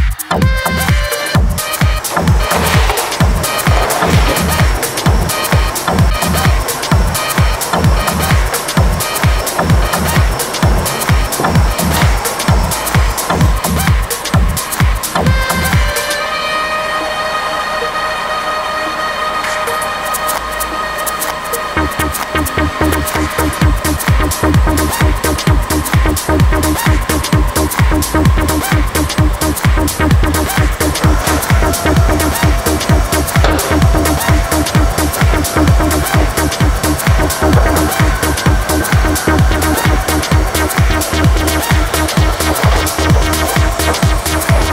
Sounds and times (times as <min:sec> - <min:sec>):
Disco: 0:00.0 - 0:16.4, 0:19.4 - 0:44.7.